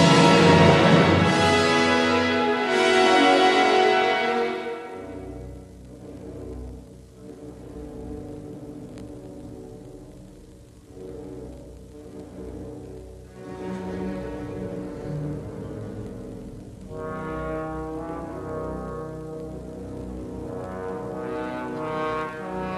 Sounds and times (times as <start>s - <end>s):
Trombone: 0.0s - 5.3s, 16.9s - 22.7s
Bowed string instrument: 0.0s - 22.7s
Orchestra: 0.0s - 22.7s.